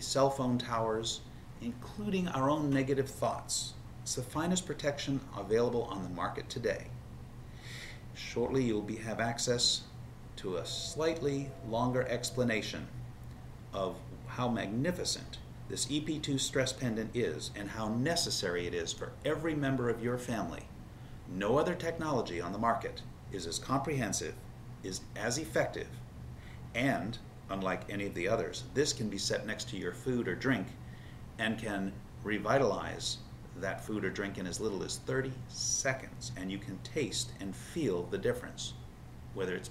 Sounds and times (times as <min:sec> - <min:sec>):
Speech: 0:00.0 - 0:07.0, 0:08.2 - 0:13.0, 0:13.8 - 0:20.7, 0:21.3 - 0:26.0, 0:26.7 - 0:30.8, 0:31.4 - 0:38.8, 0:39.4 - 0:39.7
Inside, small room: 0:00.0 - 0:39.7.